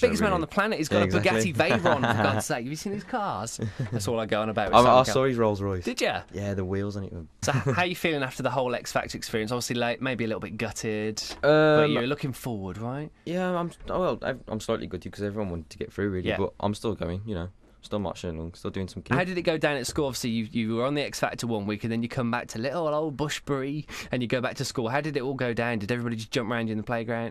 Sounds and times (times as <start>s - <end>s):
Speech: 0.0s - 27.3s.